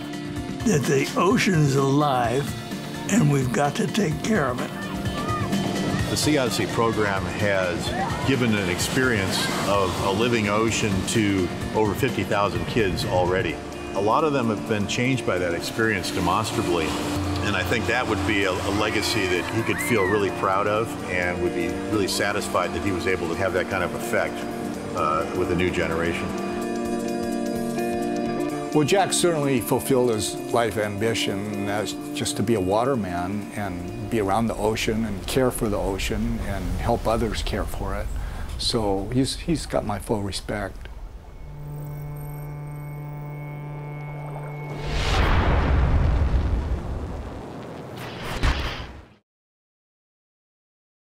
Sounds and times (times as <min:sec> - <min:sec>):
Music: 0:00.0 - 0:45.9.